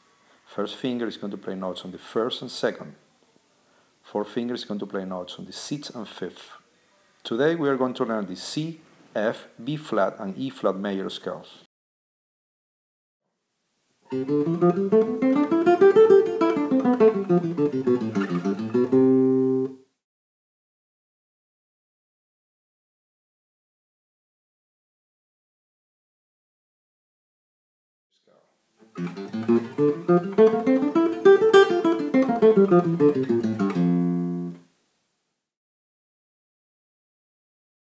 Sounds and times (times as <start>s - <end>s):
Speech: 0.5s - 3.0s, 4.0s - 11.7s, 28.2s - 28.5s.